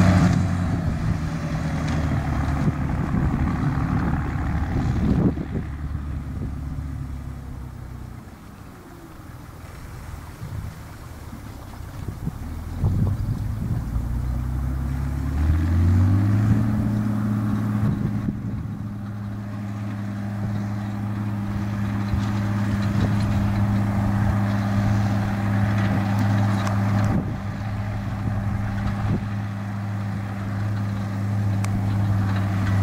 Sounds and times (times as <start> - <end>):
Outside, rural or natural: 0.0 - 32.8
Vehicle: 0.0 - 32.8.